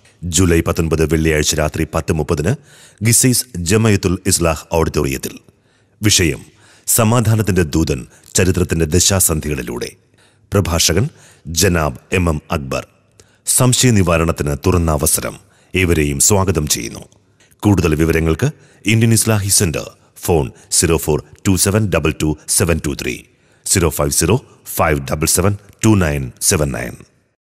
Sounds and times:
Narration, monologue: 0:00.0 - 0:27.4
Male speech, man speaking: 0:00.2 - 0:05.4, 0:06.0 - 0:10.0, 0:10.6 - 0:12.9, 0:13.5 - 0:27.1.

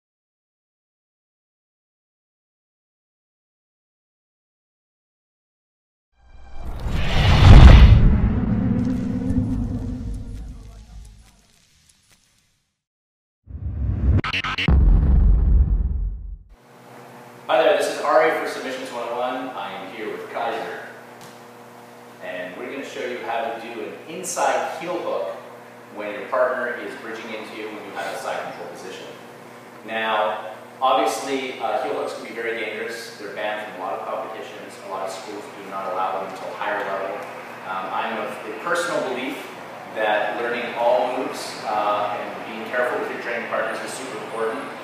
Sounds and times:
Silence: 0:06.2 - 0:11.2, 0:13.5 - 0:16.5.

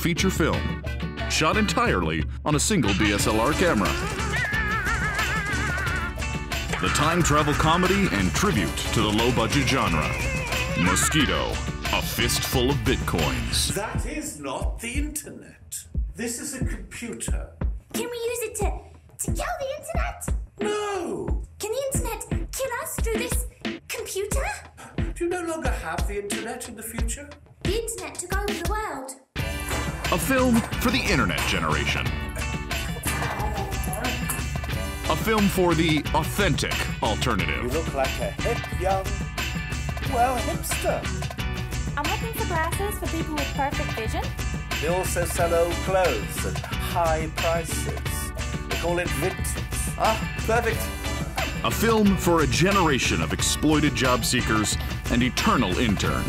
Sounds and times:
Speech: 0:00.0 - 0:00.7, 0:01.3 - 0:04.0, 0:06.8 - 0:10.2, 0:10.8 - 0:24.6, 0:30.1 - 0:32.1, 0:35.1 - 0:39.1, 0:51.7 - 0:56.2
Music: 0:00.0 - 0:56.2.

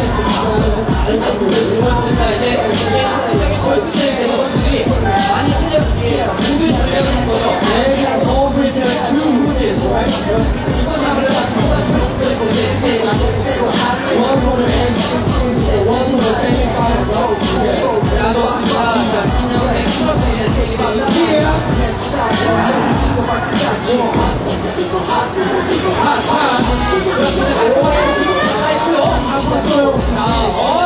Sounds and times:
Music: 0:00.0 - 0:30.8.

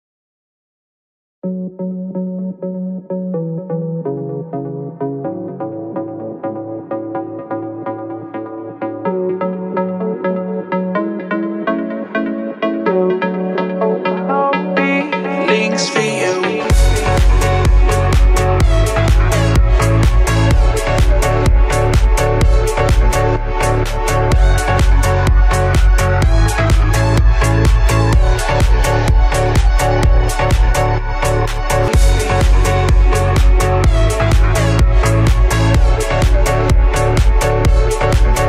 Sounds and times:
Music: 0:01.4 - 0:38.4.

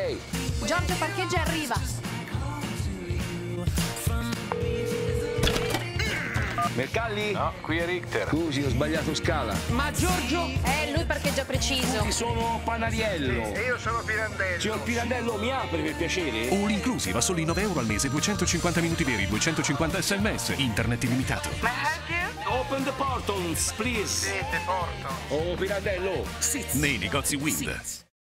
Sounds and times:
Music: 0:00.0 - 0:28.1
Speech: 0:06.8 - 0:28.1.

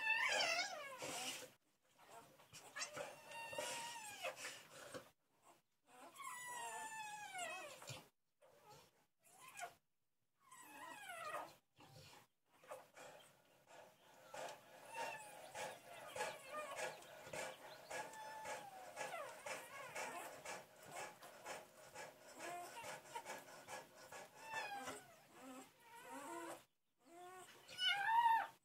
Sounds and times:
Dog: 0:00.0 - 0:09.8, 0:10.5 - 0:28.6.

